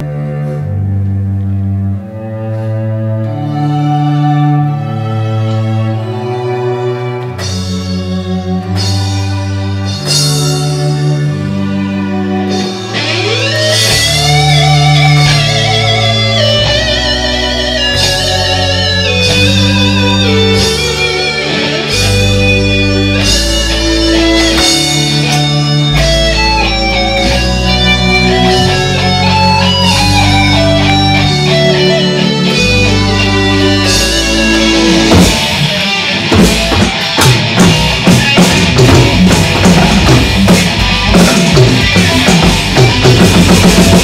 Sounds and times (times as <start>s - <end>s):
Bass guitar: 0.0s - 44.0s
Electric guitar: 0.0s - 44.0s
Strum: 0.0s - 44.0s.